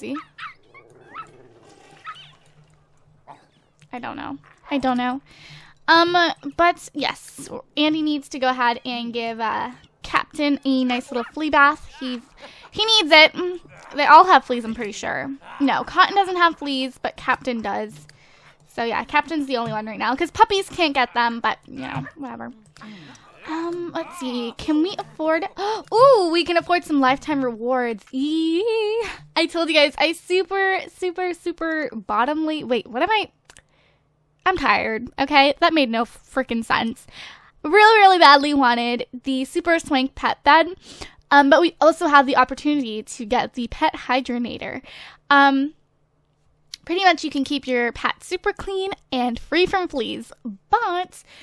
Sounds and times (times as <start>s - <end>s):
Speech: 0.0s - 0.2s, 3.9s - 5.2s, 5.9s - 18.0s, 18.7s - 33.3s, 34.4s - 45.8s, 46.8s - 51.3s.